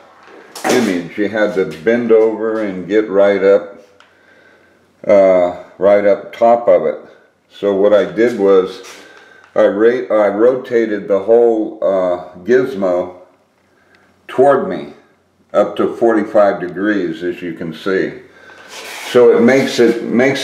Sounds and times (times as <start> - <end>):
Speech: 0.6 - 3.8, 5.0 - 13.3, 14.3 - 18.3, 18.9 - 20.4.